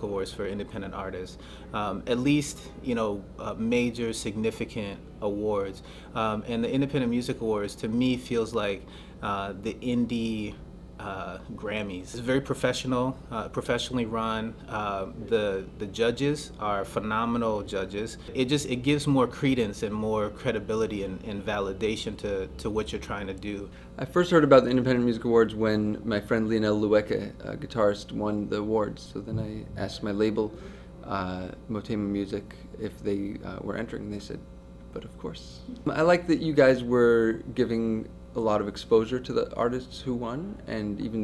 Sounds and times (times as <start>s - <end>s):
Speech: 0.0s - 41.2s.